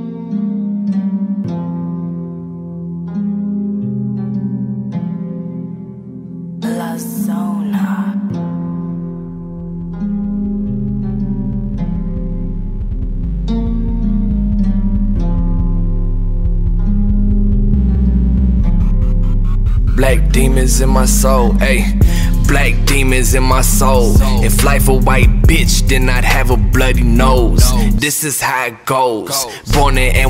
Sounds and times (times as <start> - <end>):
Music: 0.0 - 28.3, 29.3 - 30.2.